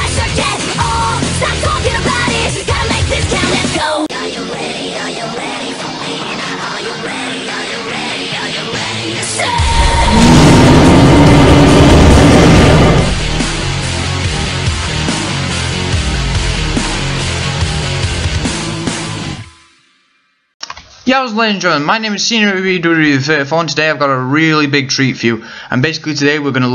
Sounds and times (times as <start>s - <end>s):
Music: 0.0s - 20.6s.